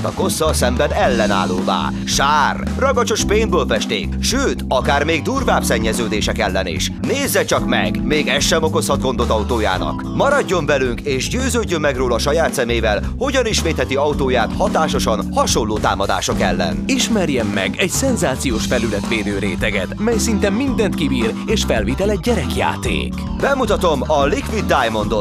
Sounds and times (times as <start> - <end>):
Music: 0.0 - 25.2
Speech: 0.0 - 25.2.